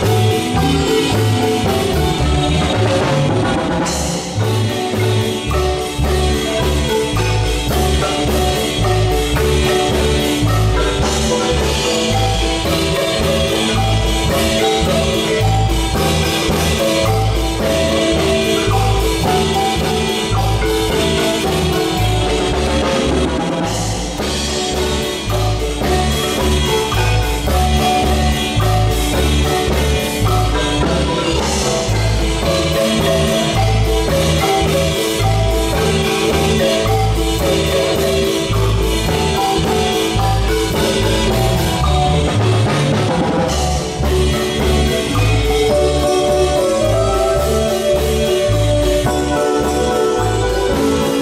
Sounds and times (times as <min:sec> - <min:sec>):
Marimba, xylophone: 0:00.0 - 0:51.2.